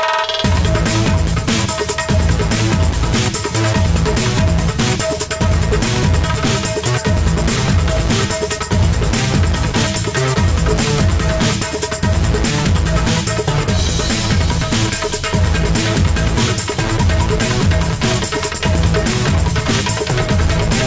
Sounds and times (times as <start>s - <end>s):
Theme music: 0.5s - 20.8s.